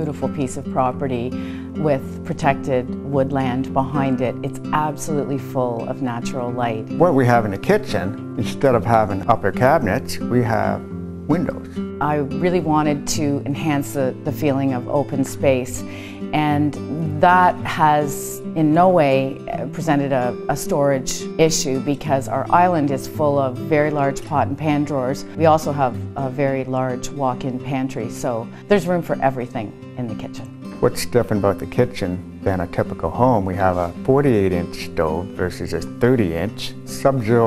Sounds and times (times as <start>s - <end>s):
Music: 0.0s - 37.4s
Speech: 1.8s - 13.4s, 30.1s - 37.4s.